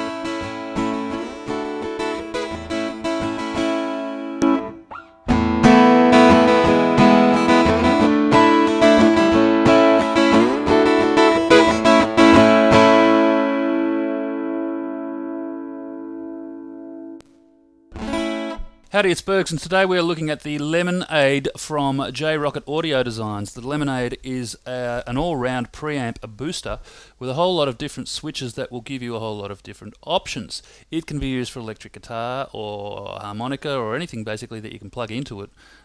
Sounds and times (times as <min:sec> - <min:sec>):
Guitar: 0:00.0 - 0:21.4.